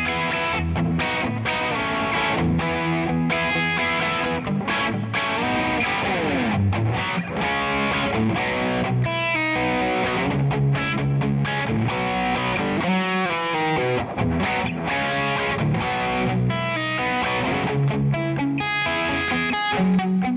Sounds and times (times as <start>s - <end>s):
Music: 0.0s - 20.3s.